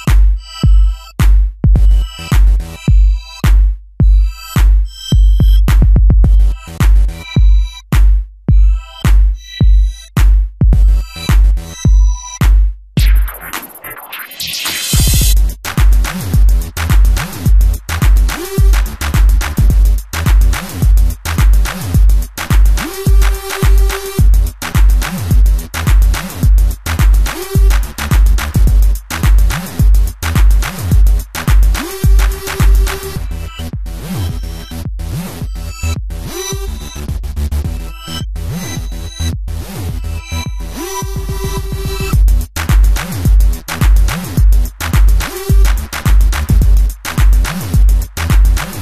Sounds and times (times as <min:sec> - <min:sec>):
Music: 0:00.0 - 0:48.8.